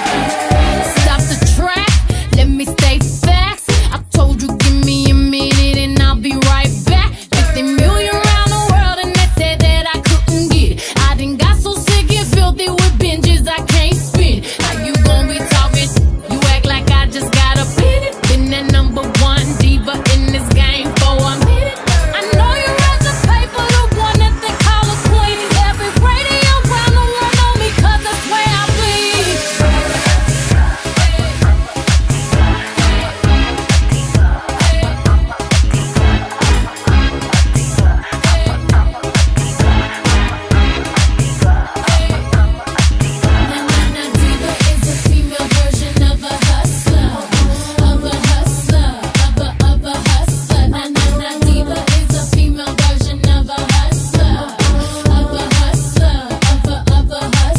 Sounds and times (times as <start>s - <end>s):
Music: 0.0s - 57.5s.